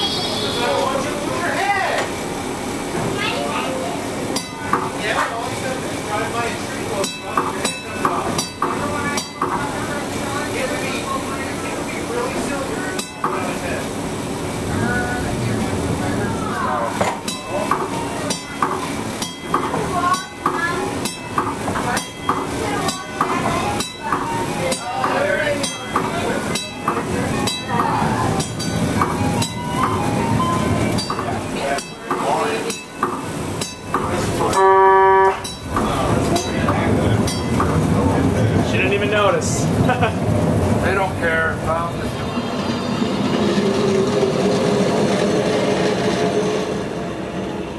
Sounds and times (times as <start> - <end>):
Bus: 0.0 - 47.7.